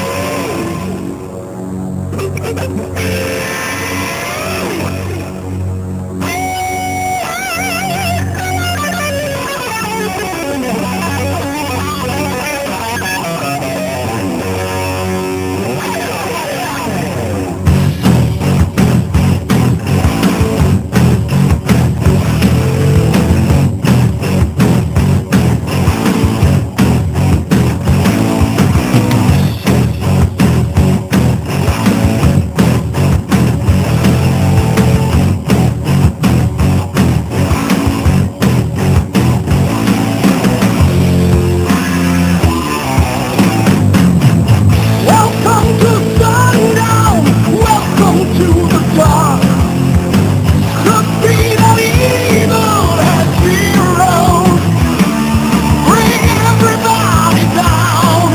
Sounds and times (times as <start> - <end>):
Music: 0.0 - 58.3.